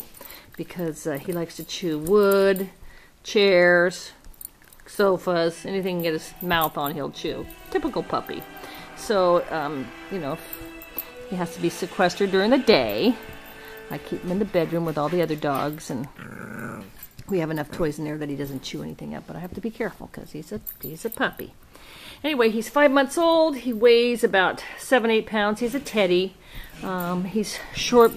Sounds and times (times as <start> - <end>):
Speech: 0.6 - 4.2, 4.9 - 8.4, 9.0 - 10.4, 11.3 - 13.2, 13.9 - 16.1, 17.3 - 21.6, 22.2 - 28.1
Music: 5.0 - 16.0
Growling: 16.1 - 17.1.